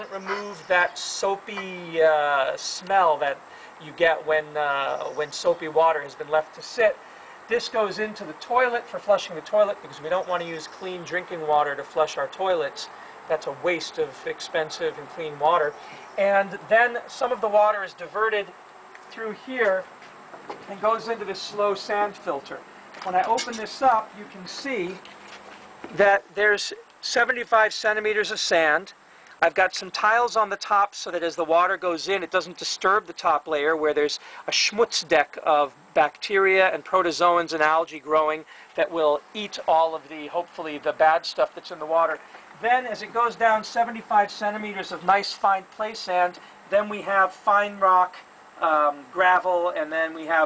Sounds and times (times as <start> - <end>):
Speech: 0.0 - 19.9, 20.6 - 25.0, 25.9 - 50.4.